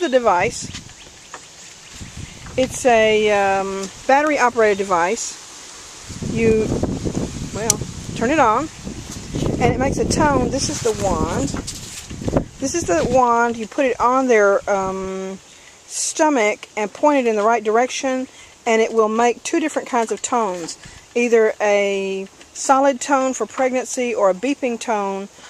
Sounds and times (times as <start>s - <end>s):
Speech: 0.0s - 0.7s, 2.6s - 5.4s, 6.3s - 6.8s, 7.6s - 8.7s, 9.6s - 11.6s, 12.6s - 25.3s.